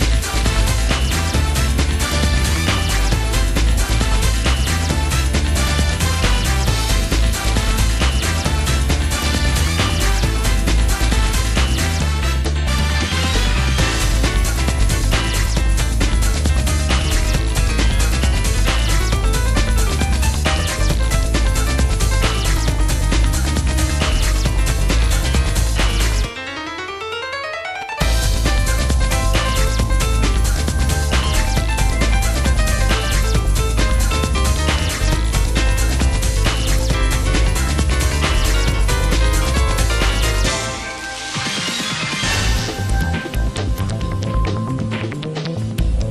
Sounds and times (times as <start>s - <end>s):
Dance music: 0.0s - 46.1s.